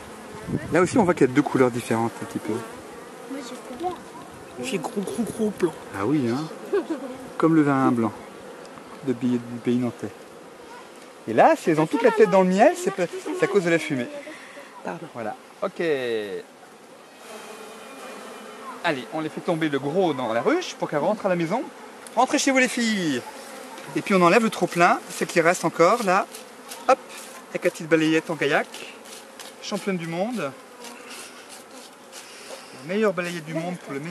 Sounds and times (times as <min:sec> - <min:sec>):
Bee, wasp, etc.: 0:00.0 - 0:34.1.